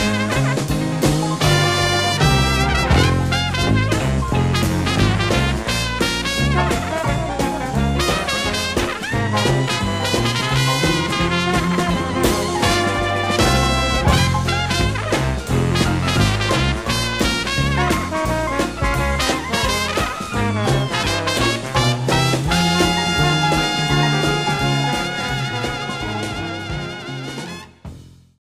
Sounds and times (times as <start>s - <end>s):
Swing music: 0.0s - 28.4s.